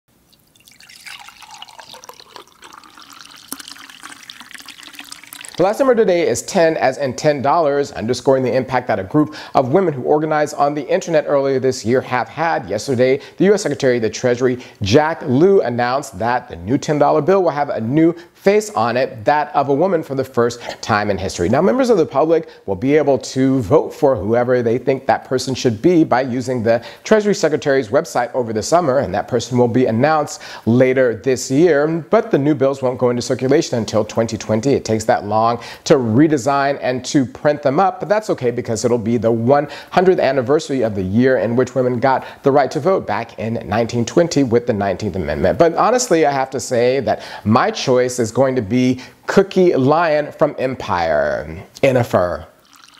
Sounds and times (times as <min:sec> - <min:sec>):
Water: 0:00.1 - 0:05.9, 0:52.6 - 0:52.9
Water tap, faucet: 0:00.3 - 0:05.9, 0:52.6 - 0:52.9.